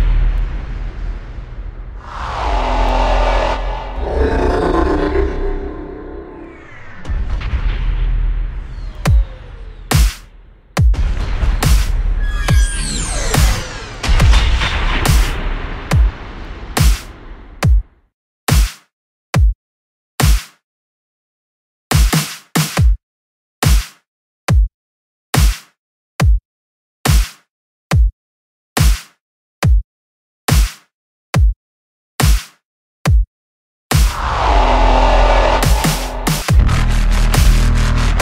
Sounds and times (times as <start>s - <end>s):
Dubstep: 34.1s - 38.2s.